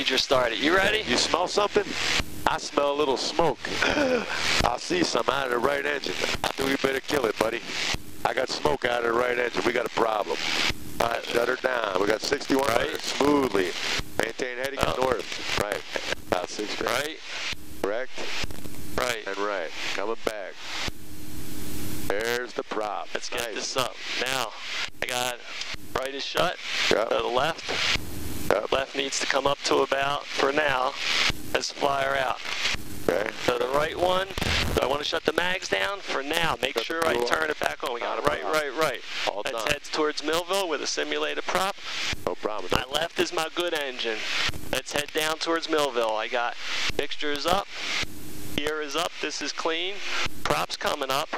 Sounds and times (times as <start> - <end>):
Speech: 0.0 - 4.0, 4.6 - 7.7, 8.3 - 10.4, 11.0 - 17.2, 17.8 - 18.3, 19.0 - 20.6, 22.1 - 27.8, 28.5 - 32.4, 33.1 - 47.7, 48.6 - 51.3.